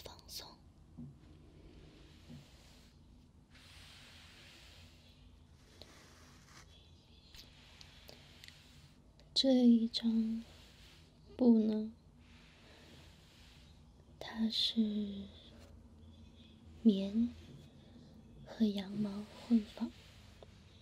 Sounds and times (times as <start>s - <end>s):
Speech: 9.4s - 10.5s, 11.3s - 12.0s, 14.2s - 15.5s, 16.8s - 17.5s, 18.4s - 20.0s.